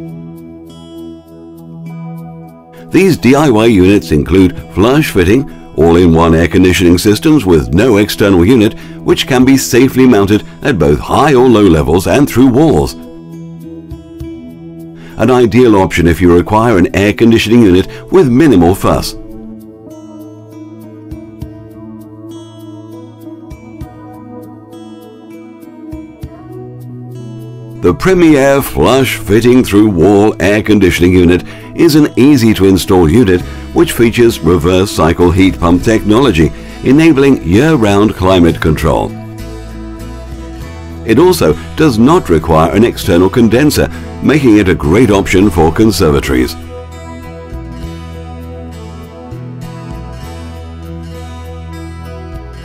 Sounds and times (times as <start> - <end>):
Music: 0.0 - 52.6
Speech: 2.9 - 13.0, 15.2 - 19.3, 27.8 - 39.2, 41.1 - 46.7.